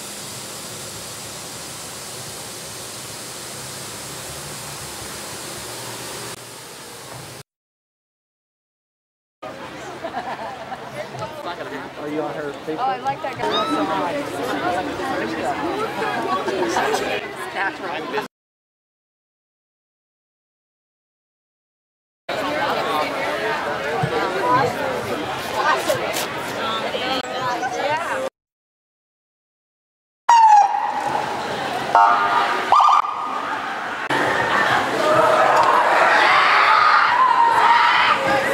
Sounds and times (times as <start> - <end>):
Speech: 9.4 - 18.3, 22.3 - 28.3, 37.6 - 38.5.